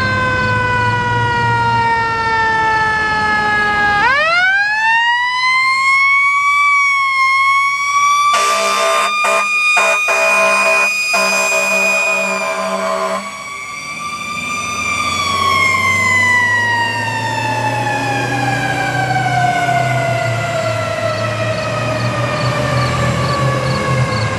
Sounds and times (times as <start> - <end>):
Vehicle: 0.0 - 24.3
Accelerating, revving, vroom: 14.3 - 24.3.